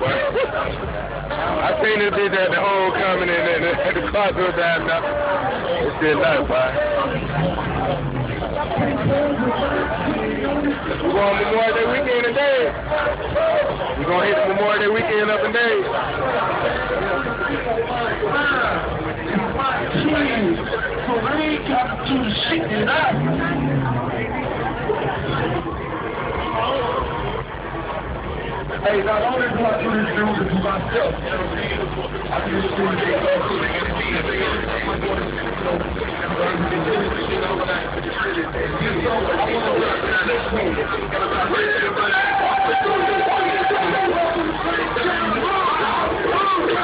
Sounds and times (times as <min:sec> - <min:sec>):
Speech: 0:00.0 - 0:27.3, 0:28.5 - 0:46.8
Music: 0:00.0 - 0:46.8.